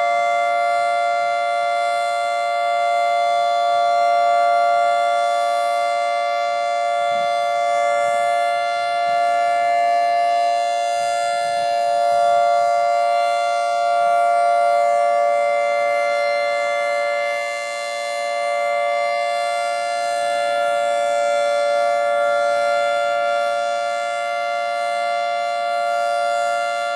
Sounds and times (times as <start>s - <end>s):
Civil defense siren: 0.0s - 26.9s.